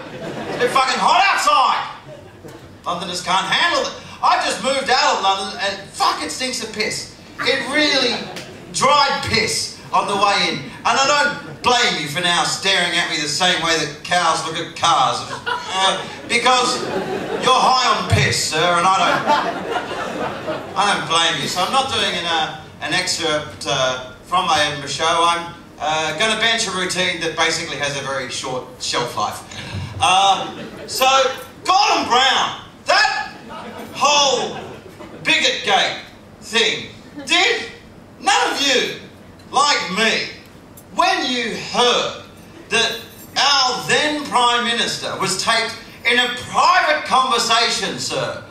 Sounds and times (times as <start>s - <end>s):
Male speech, man speaking: 0.6s - 2.1s, 2.9s - 19.3s, 20.8s - 40.4s, 41.0s - 48.5s.